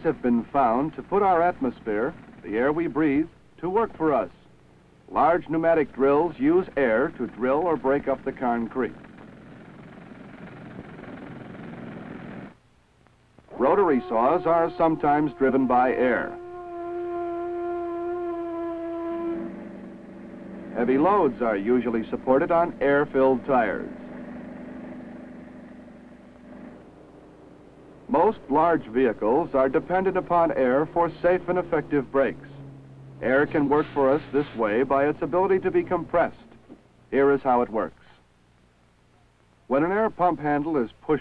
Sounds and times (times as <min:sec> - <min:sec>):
Speech: 0:00.0 - 0:04.5, 0:05.1 - 0:09.0, 0:13.5 - 0:16.4, 0:20.8 - 0:24.1, 0:28.1 - 0:32.6, 0:33.2 - 0:36.5, 0:37.1 - 0:38.2, 0:39.7 - 0:41.2.